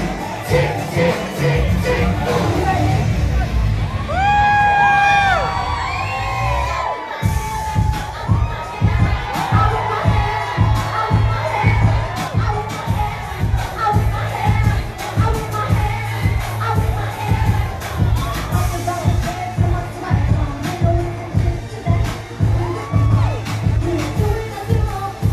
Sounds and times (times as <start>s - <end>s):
Music: 0.0s - 25.3s.